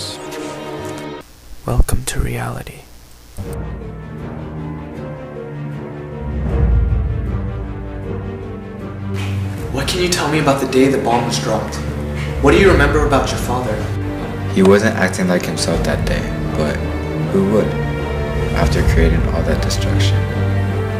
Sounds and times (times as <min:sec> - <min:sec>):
Music: 0:00.0 - 0:01.3, 0:03.4 - 0:20.9
Speech: 0:01.6 - 0:02.9, 0:09.7 - 0:11.8, 0:12.4 - 0:13.8, 0:14.5 - 0:17.8, 0:18.6 - 0:20.2.